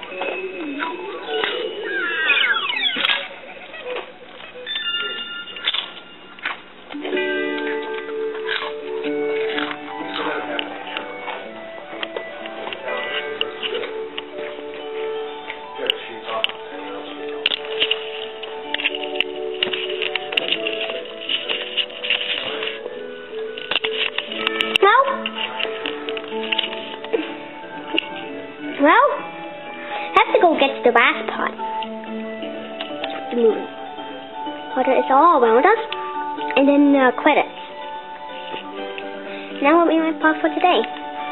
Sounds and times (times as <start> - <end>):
Music: 0.0 - 41.3.